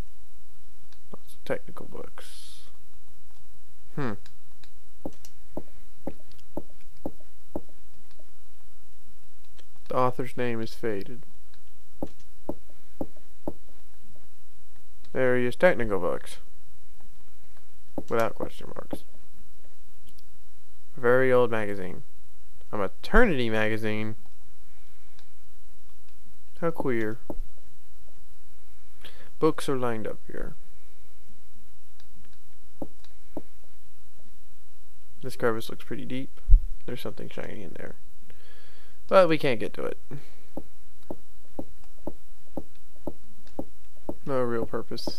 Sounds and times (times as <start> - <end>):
Speech: 1.1 - 2.8, 3.9 - 4.2, 9.9 - 11.2, 15.1 - 16.5, 18.1 - 19.1, 21.0 - 22.0, 22.7 - 24.2, 26.6 - 27.2, 29.4 - 30.6, 35.2 - 38.0, 39.1 - 40.2, 44.2 - 45.1.